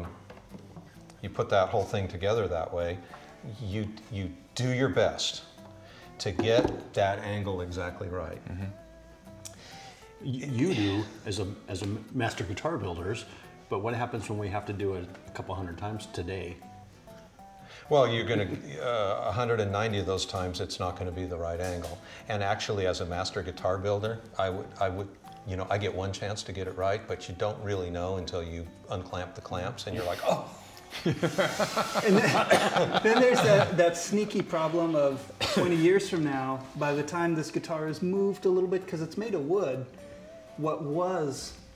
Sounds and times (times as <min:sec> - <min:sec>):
Guitar: 0:00.0 - 0:41.7.